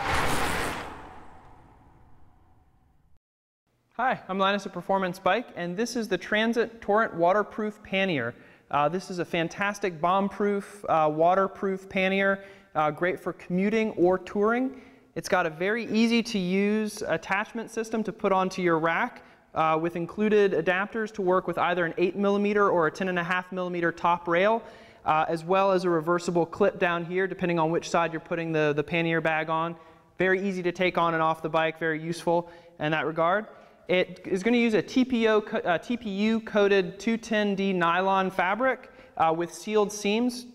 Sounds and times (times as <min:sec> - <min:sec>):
Speech: 0:04.0 - 0:40.5.